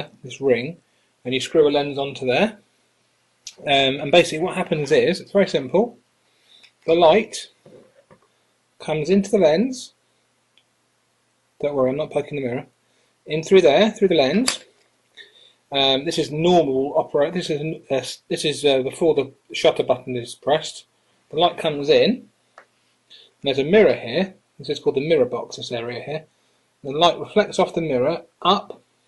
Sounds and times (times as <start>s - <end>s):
Speech: 0.0s - 2.6s, 3.5s - 6.0s, 6.9s - 7.8s, 8.8s - 10.0s, 11.6s - 12.7s, 13.3s - 14.7s, 15.7s - 22.3s, 23.4s - 28.8s.